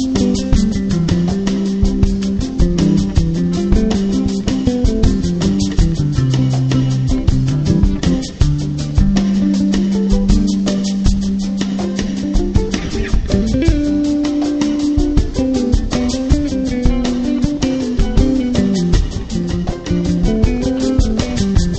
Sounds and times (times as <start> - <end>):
Rhythm and blues: 0.0 - 21.7.